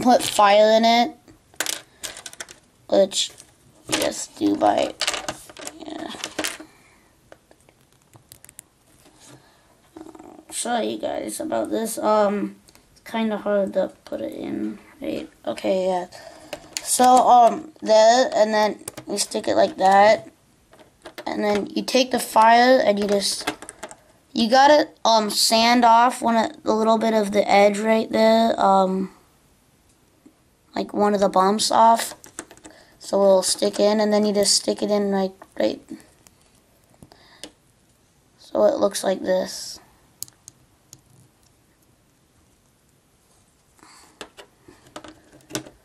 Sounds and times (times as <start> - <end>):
Speech: 0.0 - 1.2, 2.9 - 5.0, 5.7 - 6.2, 10.0 - 16.2, 16.8 - 20.3, 21.2 - 23.5, 24.4 - 29.2, 30.7 - 32.2, 33.0 - 36.0, 38.4 - 39.8
Inside, small room: 0.0 - 45.8.